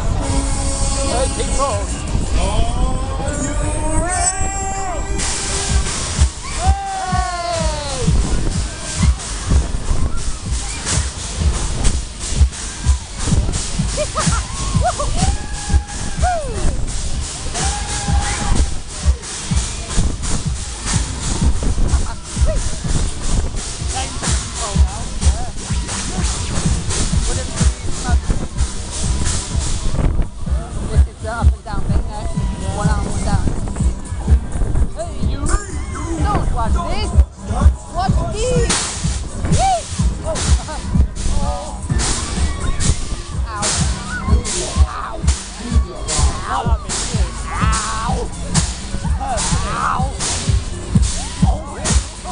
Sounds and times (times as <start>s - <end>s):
Music: 0.0s - 52.3s.